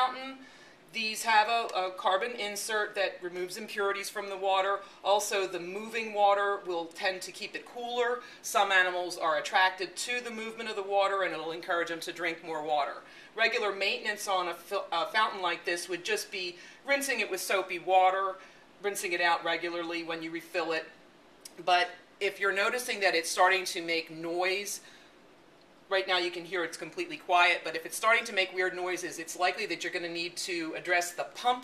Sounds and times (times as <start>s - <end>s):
Speech: 0.0s - 20.9s, 21.5s - 24.8s, 25.9s - 31.6s.